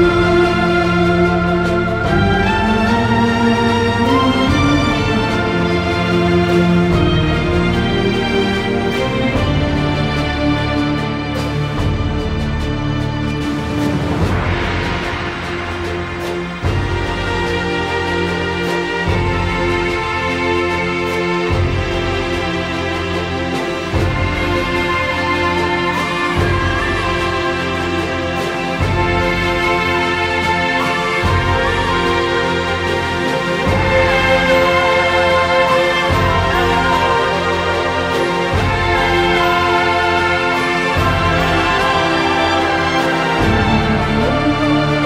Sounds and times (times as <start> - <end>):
Theme music: 0.0 - 45.0.